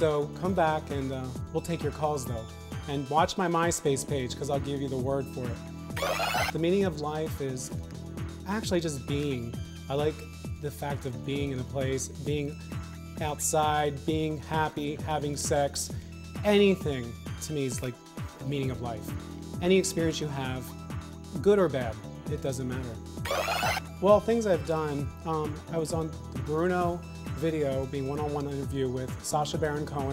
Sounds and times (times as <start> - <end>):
Speech: 0.0 - 5.6, 6.5 - 7.8, 8.5 - 12.6, 13.2 - 20.8, 21.4 - 23.0, 24.0 - 30.1
Music: 0.0 - 30.1.